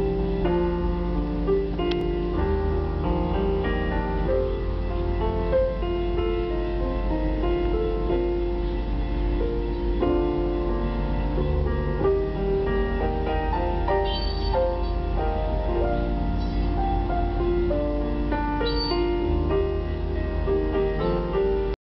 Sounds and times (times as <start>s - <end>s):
Soundtrack music: 0.0s - 21.7s
Christmas music: 0.0s - 21.8s
Tender music: 0.0s - 21.8s.